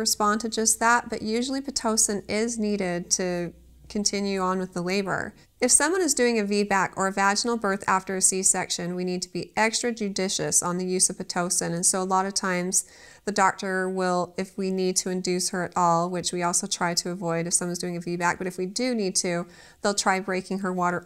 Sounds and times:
Speech: 0:00.0 - 0:21.0.

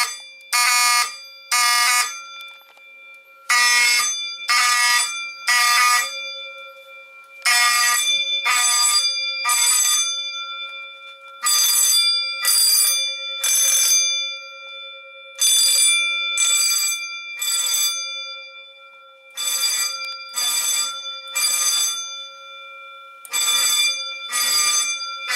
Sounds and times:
Fire alarm: 0:00.0 - 0:25.3.

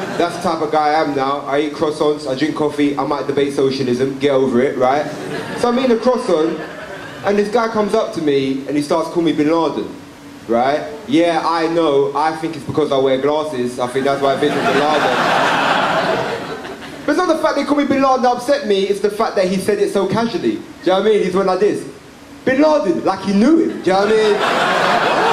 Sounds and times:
Male speech, man speaking: 0:00.2 - 0:06.6, 0:07.2 - 0:15.2, 0:17.1 - 0:24.5.

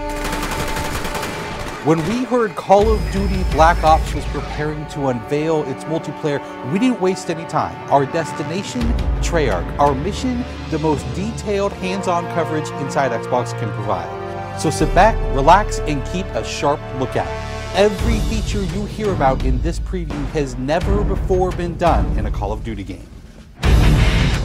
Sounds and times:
Music: 0:00.0 - 0:24.4
Speech: 0:01.9 - 0:23.1.

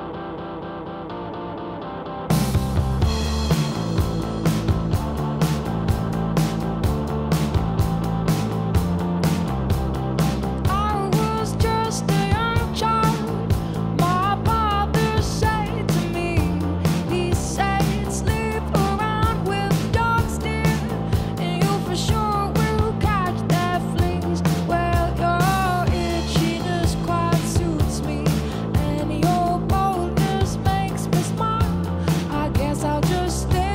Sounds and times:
Independent music: 0:00.0 - 0:33.7.

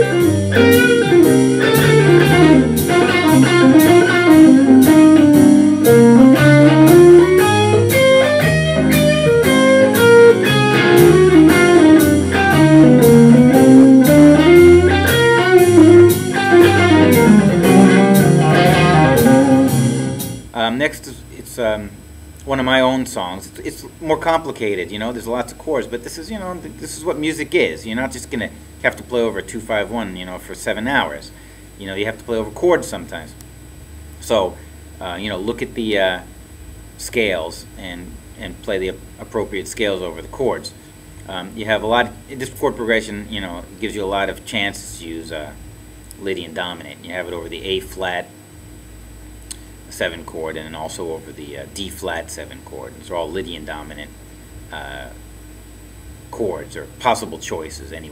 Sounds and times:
Strum: 0:00.0 - 0:20.6
Speech: 0:20.5 - 0:33.4, 0:34.2 - 0:36.3, 0:37.0 - 0:45.6, 0:46.2 - 0:48.3, 0:49.9 - 0:55.2, 0:56.3 - 0:58.1.

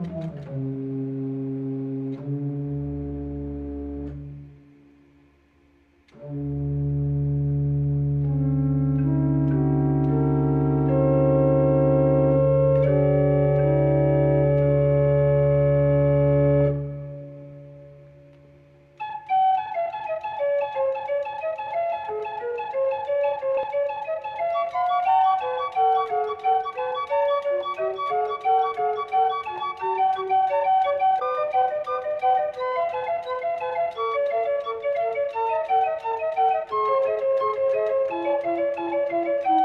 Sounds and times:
Effects unit: 0:00.0 - 0:39.6
Inside, large room or hall: 0:00.0 - 0:39.6
Music: 0:00.0 - 0:39.6.

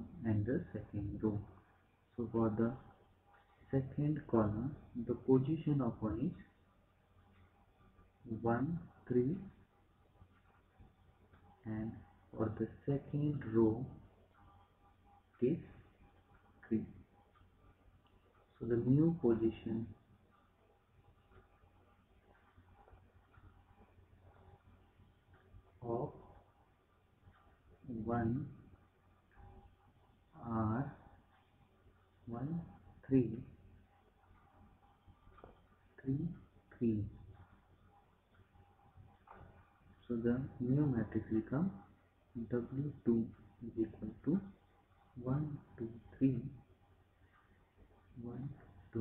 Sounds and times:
Speech: 0:00.0 - 0:01.6, 0:02.2 - 0:02.9, 0:03.7 - 0:06.5, 0:08.3 - 0:09.6, 0:11.6 - 0:14.0, 0:15.4 - 0:15.8, 0:16.6 - 0:17.0, 0:18.6 - 0:20.0, 0:25.8 - 0:26.3, 0:27.9 - 0:28.6, 0:30.4 - 0:31.1, 0:32.3 - 0:33.5, 0:36.0 - 0:37.2, 0:40.1 - 0:44.6, 0:45.2 - 0:46.6, 0:48.2 - 0:49.0.

